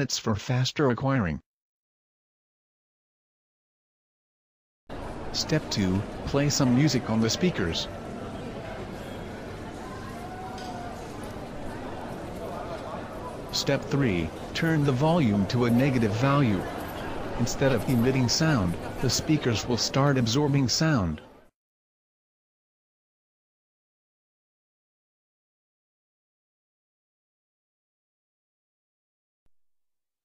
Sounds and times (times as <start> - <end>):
Speech: 0.0 - 1.5, 5.3 - 8.0, 11.9 - 21.5.